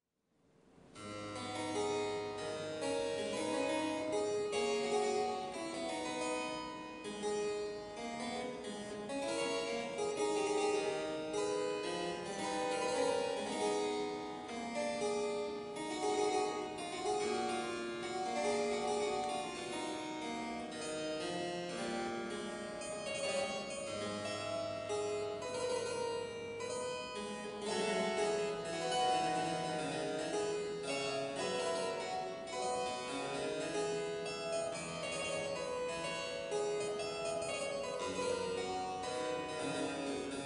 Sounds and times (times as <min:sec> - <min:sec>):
Harpsichord: 0:01.0 - 0:40.4.